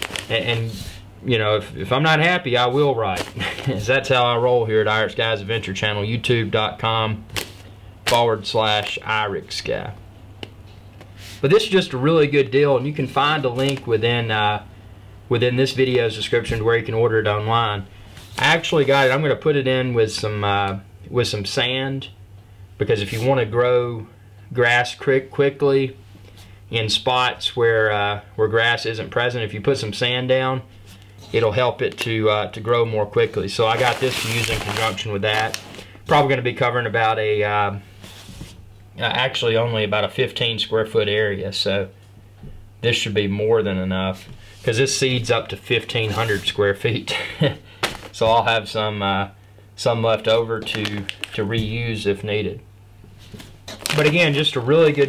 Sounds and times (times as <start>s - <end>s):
Inside, small room: 0.0s - 55.0s
Speech: 0.3s - 7.3s, 8.1s - 10.0s, 11.4s - 14.7s, 15.3s - 22.2s, 22.8s - 26.0s, 26.7s - 30.7s, 31.3s - 37.8s, 39.0s - 42.0s, 42.8s - 47.6s, 48.2s - 52.7s, 53.9s - 55.0s.